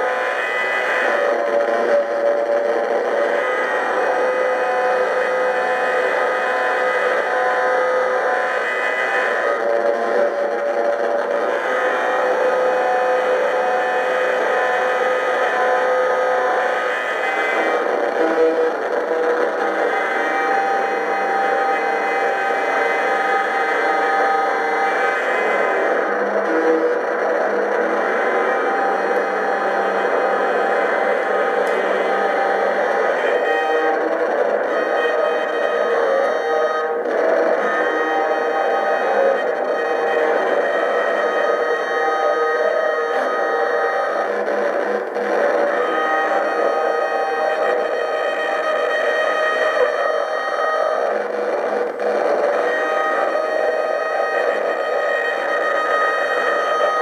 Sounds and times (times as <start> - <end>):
Cacophony: 0.0 - 57.0.